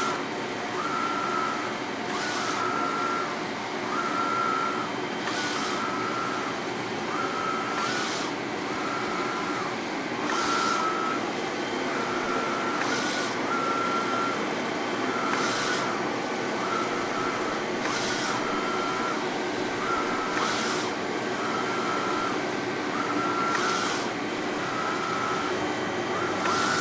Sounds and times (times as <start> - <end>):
Printer: 0.0 - 26.8.